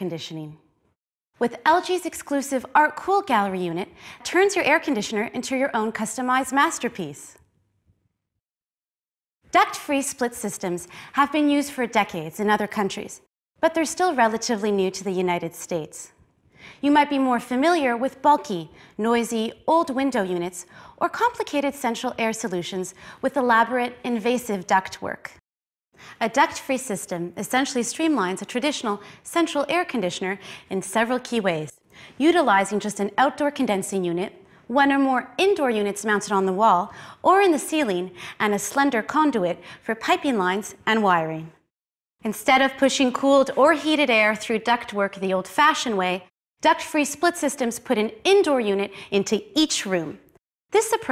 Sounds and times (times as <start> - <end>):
Speech: 0.0 - 0.6, 1.4 - 7.4, 9.5 - 16.2, 16.8 - 25.4, 26.2 - 41.6, 42.2 - 51.1.